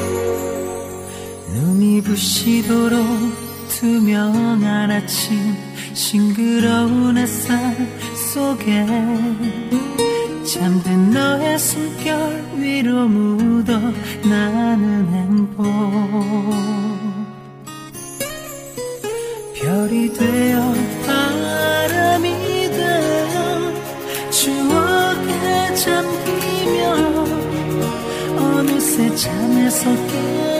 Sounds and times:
Music: 0:00.0 - 0:30.6.

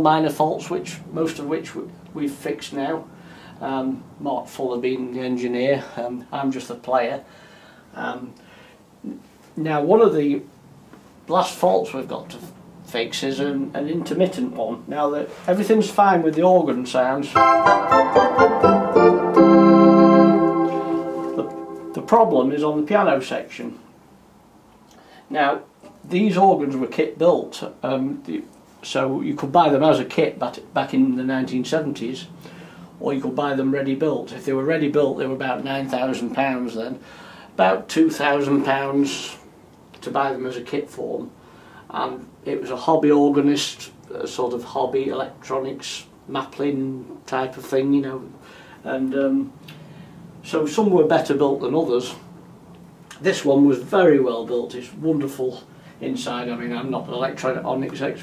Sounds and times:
Speech: 0:00.0 - 0:07.3, 0:07.9 - 0:08.4, 0:09.0 - 0:10.5, 0:11.3 - 0:17.4, 0:22.0 - 0:23.9, 0:25.3 - 0:32.4, 0:33.0 - 0:49.6, 0:50.4 - 0:52.3, 0:53.1 - 0:58.2.

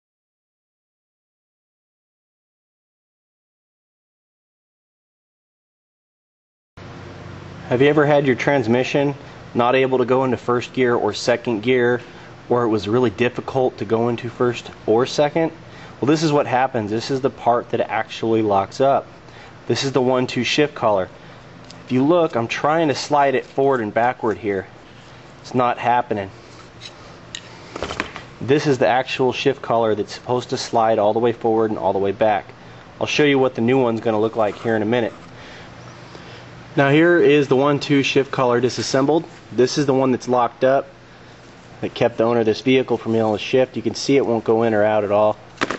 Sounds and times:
Speech: 0:07.7 - 0:19.1, 0:19.7 - 0:21.1, 0:21.9 - 0:24.7, 0:25.4 - 0:26.4, 0:28.4 - 0:35.2, 0:36.8 - 0:41.0, 0:41.8 - 0:45.4.

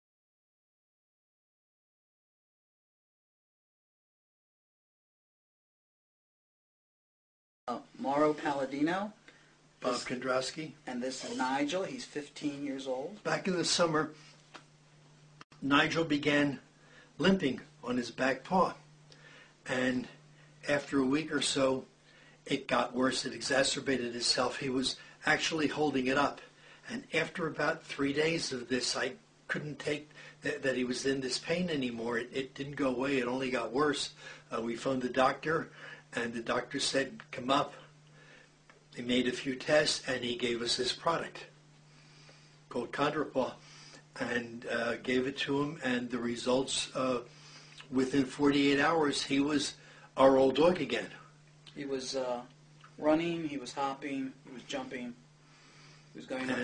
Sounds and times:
Speech: 0:07.7 - 0:09.2, 0:09.8 - 0:14.2, 0:15.6 - 0:16.6, 0:17.2 - 0:18.8, 0:19.7 - 0:21.9, 0:22.5 - 0:37.9, 0:39.0 - 0:41.6, 0:42.7 - 0:43.6, 0:44.2 - 0:47.3, 0:47.9 - 0:55.2, 0:56.2 - 0:56.6.

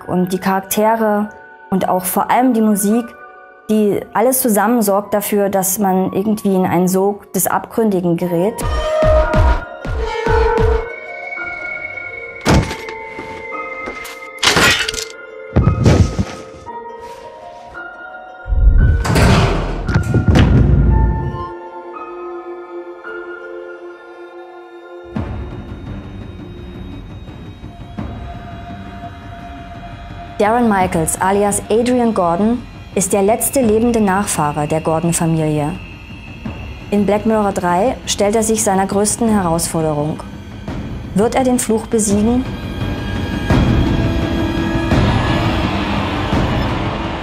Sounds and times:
Speech: 0:00.0 - 0:08.6, 0:30.4 - 0:35.8, 0:36.9 - 0:40.3, 0:41.2 - 0:42.5
Music: 0:00.0 - 0:47.2
Thunk: 0:12.4 - 0:13.0, 0:15.6 - 0:16.5, 0:18.9 - 0:21.0.

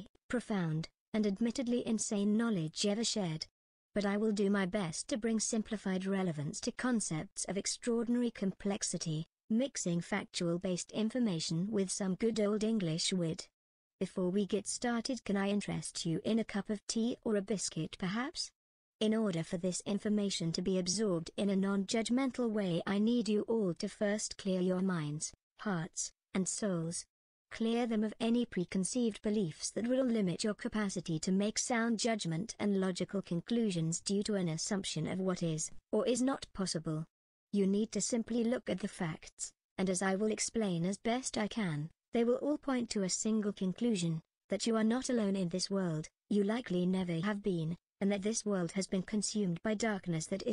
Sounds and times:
Speech: 0:00.0 - 0:50.5.

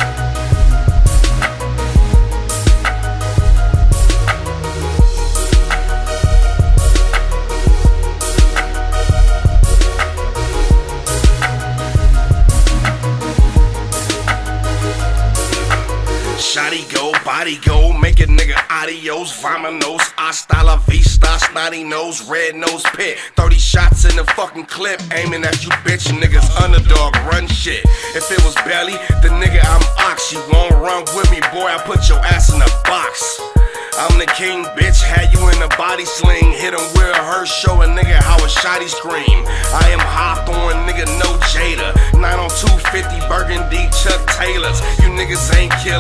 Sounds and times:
Hip hop music: 0:00.0 - 0:46.0
Rapping: 0:16.4 - 0:46.0.

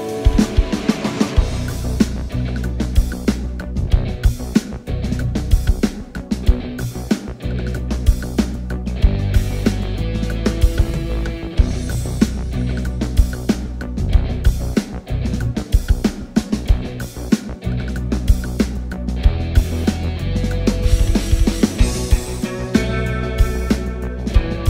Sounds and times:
Guitar: 0:00.0 - 0:24.6.

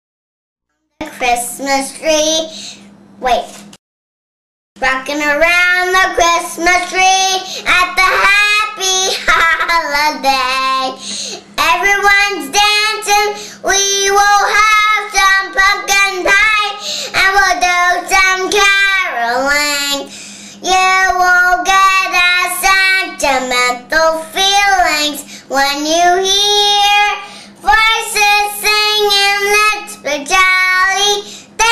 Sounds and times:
Child singing: 0:04.8 - 0:11.0, 0:11.6 - 0:31.7.

